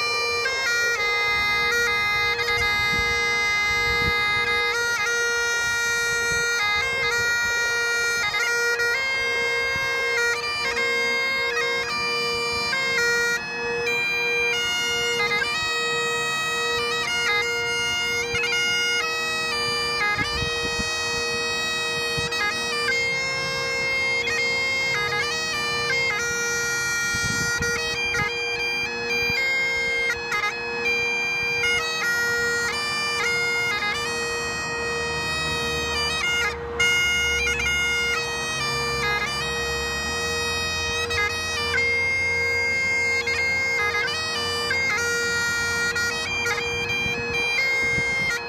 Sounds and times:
Bagpipes: 0.0 - 48.4
Wind instrument, woodwind instrument: 0.0 - 48.4.

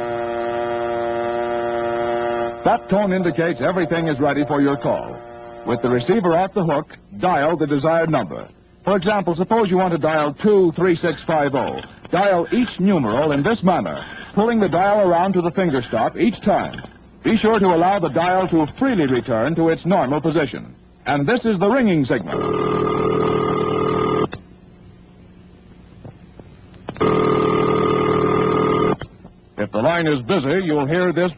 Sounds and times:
Speech: 2.7 - 22.3, 29.6 - 31.3.

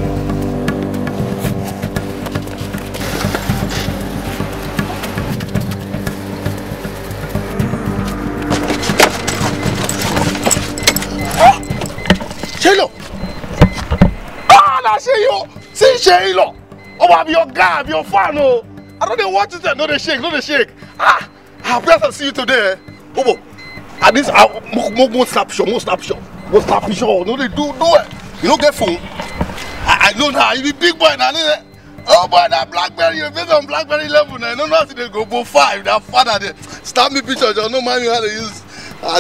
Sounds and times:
Music: 0.0 - 39.2
Outside, urban or manmade: 0.0 - 39.2.

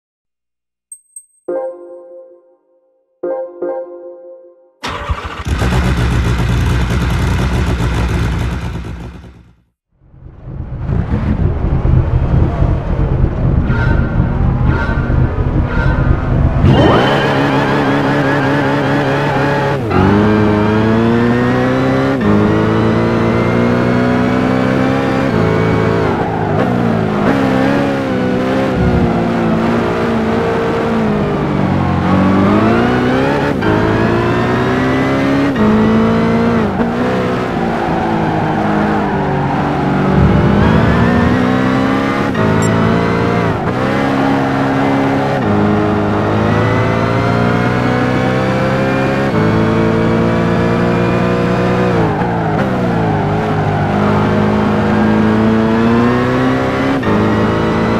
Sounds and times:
Car: 4.8 - 57.9.

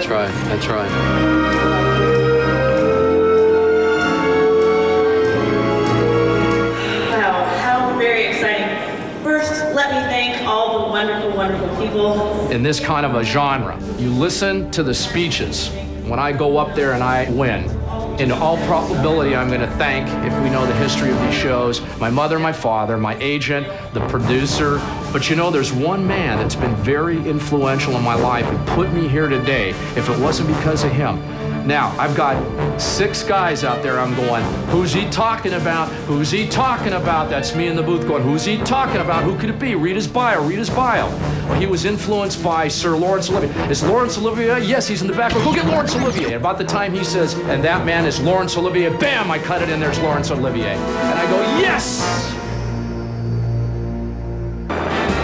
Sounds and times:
Music: 0.0 - 55.2
Speech: 7.1 - 52.4.

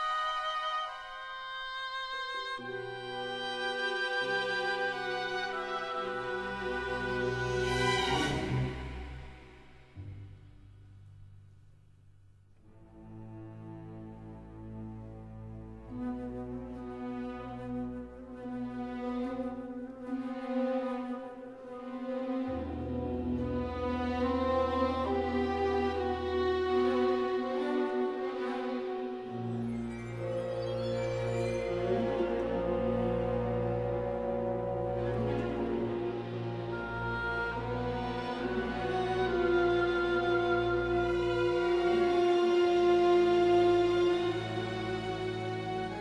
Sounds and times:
Cello: 0.0 - 10.4, 12.6 - 46.0.

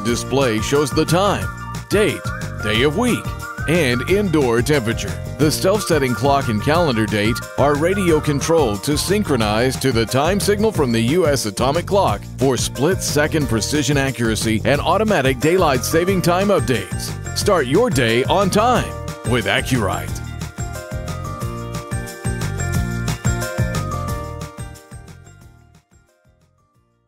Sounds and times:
Speech: 0.0 - 20.2
Music: 0.0 - 27.0.

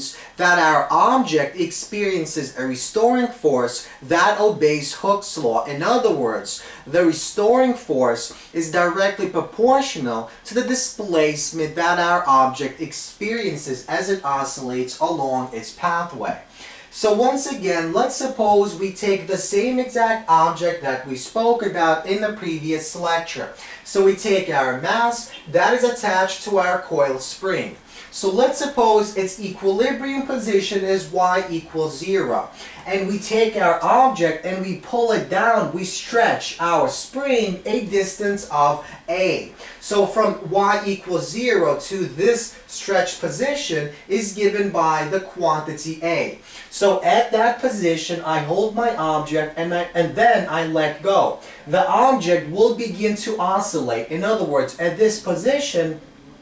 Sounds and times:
Speech: 0.0 - 56.4.

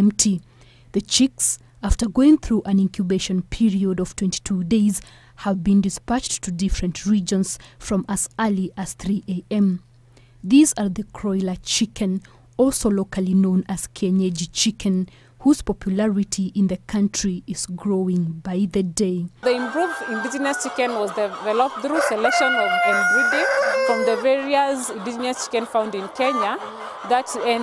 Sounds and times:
Speech: 0.0 - 0.4, 1.0 - 9.8, 10.5 - 27.6
Cluck: 20.4 - 27.6.

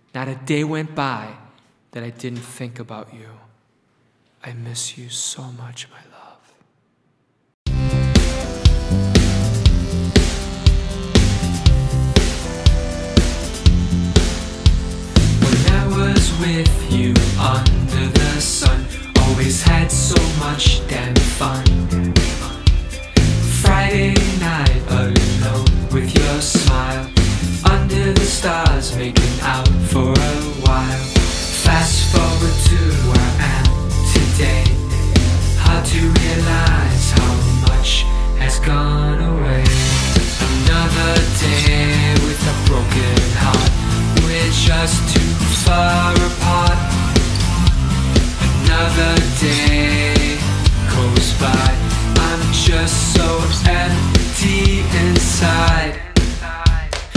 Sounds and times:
Pop music: 7.7 - 57.1.

